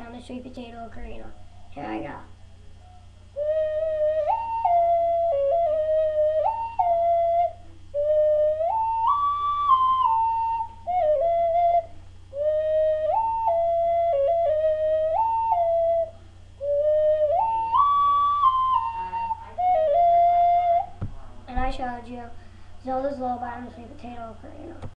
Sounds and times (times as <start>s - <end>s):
Child speech, kid speaking: 0.0s - 2.4s, 21.5s - 24.9s.